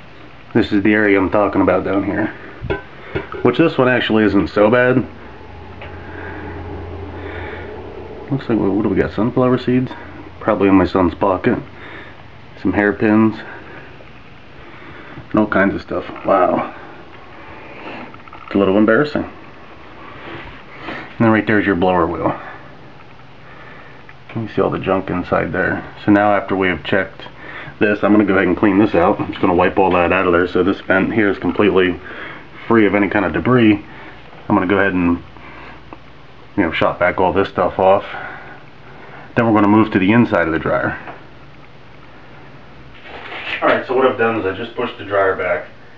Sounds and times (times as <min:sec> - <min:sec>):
Inside, small room: 0:00.0 - 0:45.9
Speech: 0:00.5 - 0:02.4, 0:03.4 - 0:05.2, 0:08.3 - 0:11.7, 0:12.6 - 0:13.6, 0:15.3 - 0:16.8, 0:18.5 - 0:19.4, 0:21.2 - 0:22.6, 0:24.3 - 0:33.9, 0:34.5 - 0:35.3, 0:36.6 - 0:38.4, 0:39.4 - 0:41.2, 0:43.1 - 0:45.8.